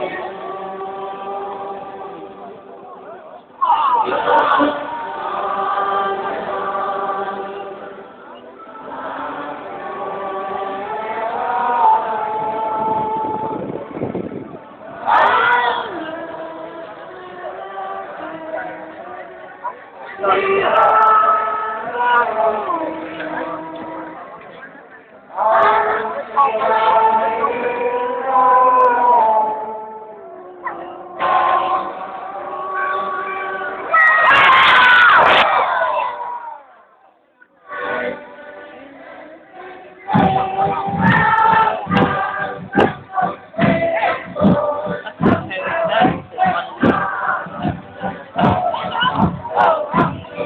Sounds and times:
Music: 0.0 - 36.2, 37.2 - 50.4
Outside, urban or manmade: 0.0 - 50.4.

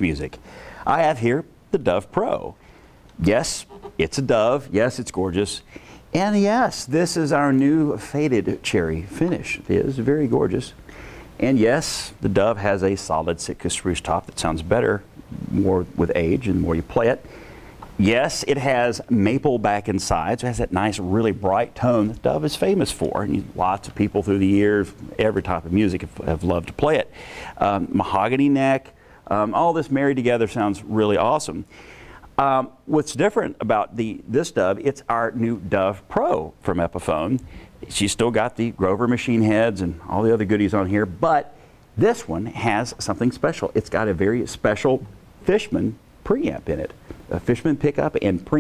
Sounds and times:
Speech: 0.0 - 2.6, 3.2 - 10.8, 11.4 - 17.2, 18.0 - 31.7, 32.4 - 48.6.

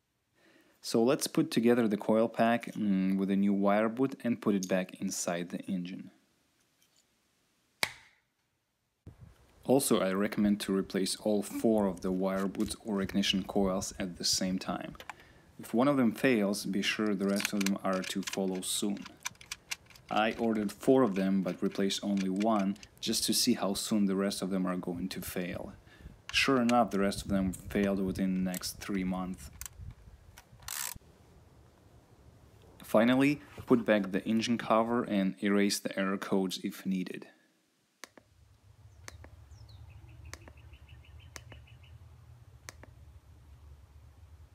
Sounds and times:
Speech: 0.8 - 6.2, 9.7 - 15.0, 15.6 - 19.1, 20.1 - 29.5, 32.8 - 37.4.

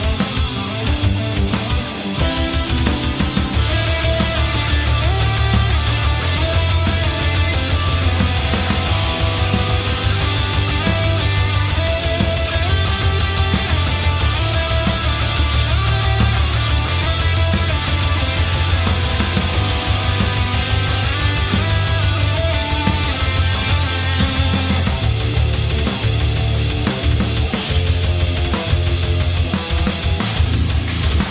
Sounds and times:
Guitar: 0.0 - 31.3
Heavy metal: 0.0 - 31.3
Progressive rock: 0.0 - 31.3.

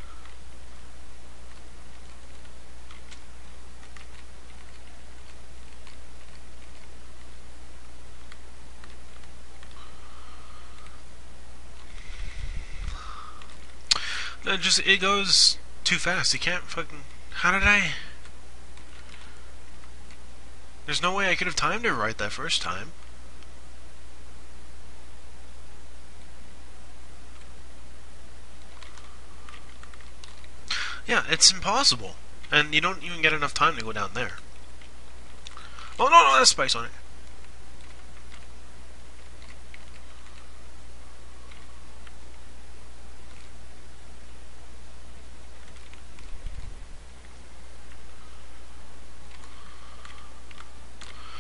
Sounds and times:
Speech: 14.4 - 18.1, 20.9 - 23.0, 31.0 - 34.4, 36.0 - 37.0.

